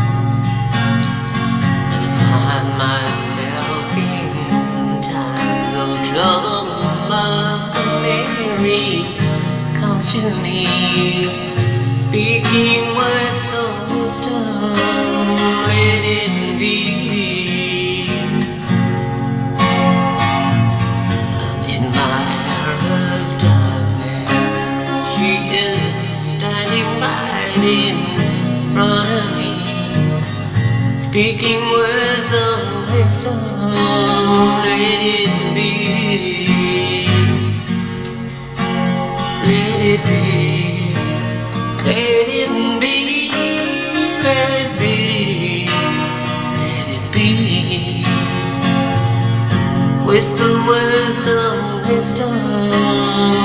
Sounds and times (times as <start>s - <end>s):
Acoustic guitar: 0.0s - 53.4s.